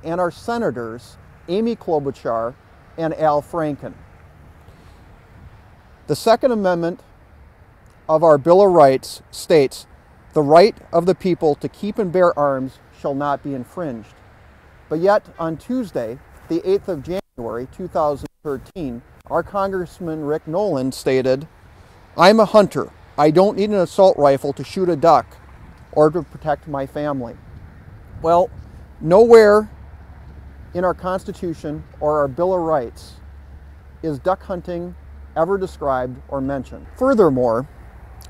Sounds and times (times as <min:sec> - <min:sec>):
Speech: 0:00.0 - 0:04.0, 0:06.1 - 0:07.0, 0:08.1 - 0:14.2, 0:14.9 - 0:21.5, 0:22.2 - 0:27.4, 0:28.2 - 0:29.7, 0:30.8 - 0:33.2, 0:34.0 - 0:37.7.